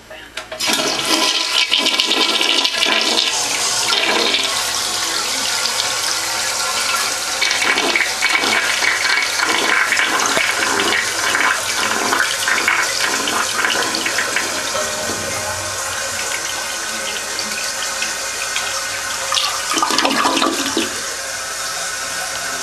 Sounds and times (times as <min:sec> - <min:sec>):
Toilet flush: 0:00.4 - 0:22.6.